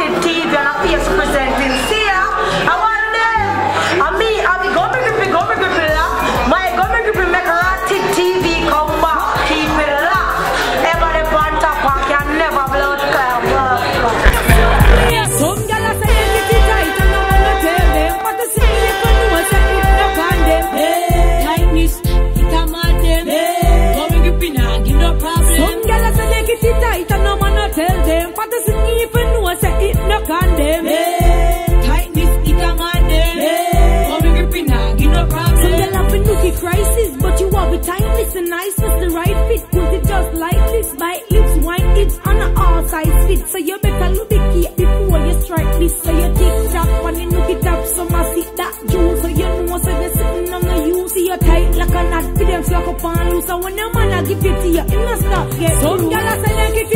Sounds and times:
Pop music: 0.0s - 56.9s
Rhythm and blues: 3.9s - 56.9s.

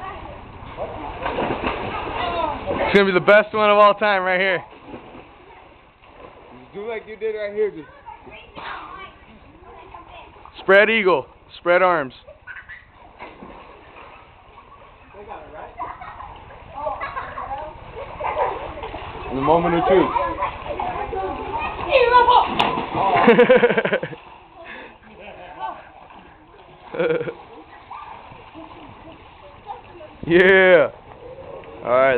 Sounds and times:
Splash, splatter: 1.1s - 3.0s, 13.1s - 14.2s, 20.0s - 24.4s.

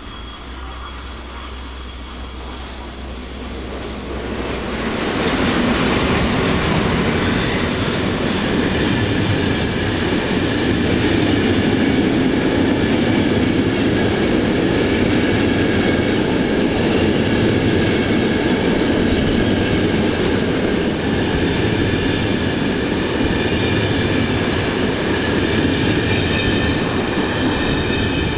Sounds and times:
Outside, urban or manmade: 0.0s - 28.3s
Railroad car, train wagon: 0.0s - 28.3s
Train: 0.0s - 28.3s.

